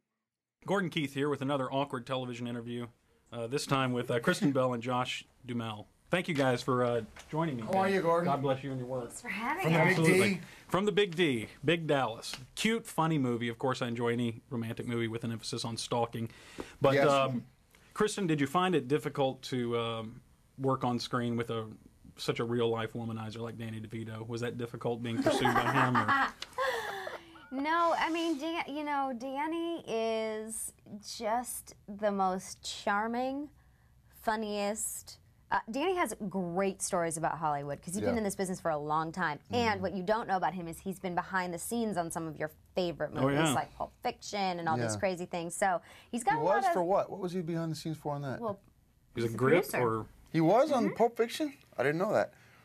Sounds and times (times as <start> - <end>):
Speech: 37.9 - 38.3, 39.5 - 39.9, 43.2 - 43.7, 44.7 - 45.0.